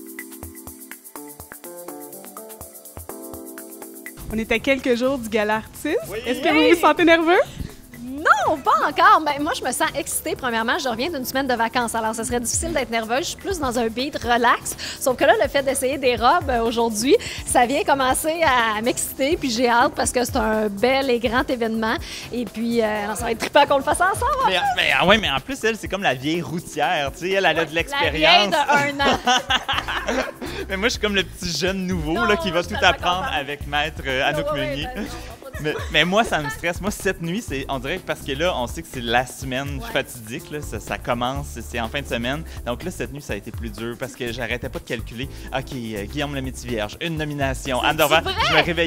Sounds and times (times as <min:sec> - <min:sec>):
Music: 0:00.0 - 0:48.8
Speech: 0:04.3 - 0:07.5, 0:22.4 - 0:29.3, 0:30.7 - 0:48.8.